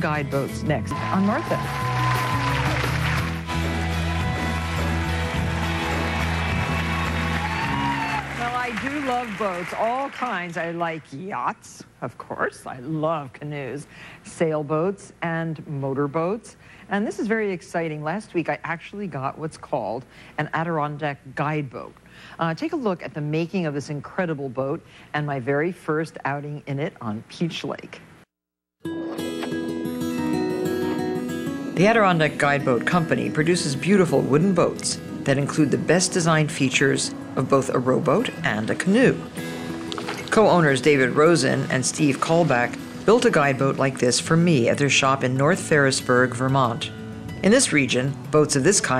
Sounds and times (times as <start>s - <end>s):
Music: 0.0s - 9.6s, 28.8s - 48.9s.